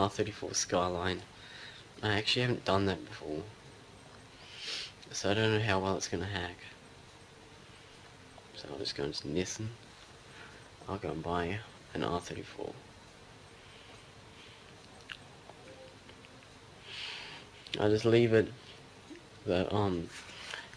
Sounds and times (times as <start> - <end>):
Speech: 0.0 - 1.3, 2.0 - 3.5, 5.1 - 6.8, 8.5 - 9.8, 10.8 - 12.8, 17.8 - 18.6, 19.4 - 20.2.